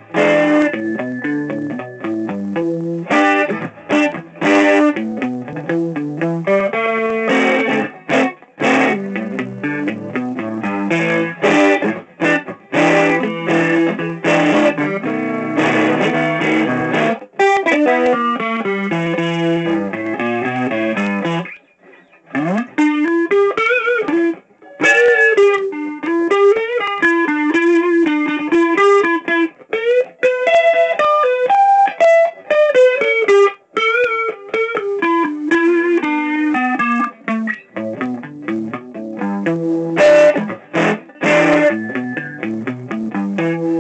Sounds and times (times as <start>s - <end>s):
Guitar: 0.0s - 43.8s.